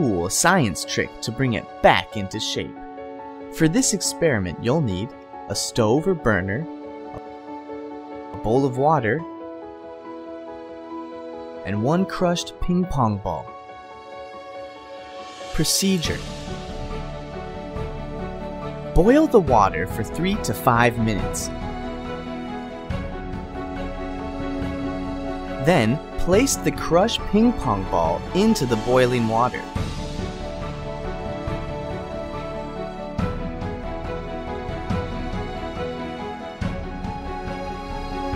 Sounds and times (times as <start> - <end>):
Speech: 0.0 - 2.8, 3.6 - 6.7, 8.4 - 9.2, 11.7 - 13.5, 15.5 - 16.2, 19.0 - 21.5, 25.6 - 29.7
Music: 0.0 - 38.3.